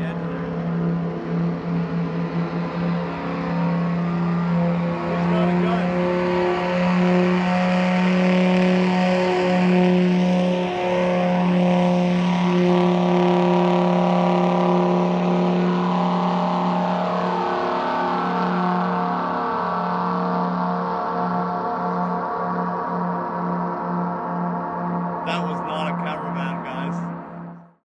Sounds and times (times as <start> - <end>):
Speech: 0.0 - 0.5, 5.1 - 5.9, 25.3 - 27.0.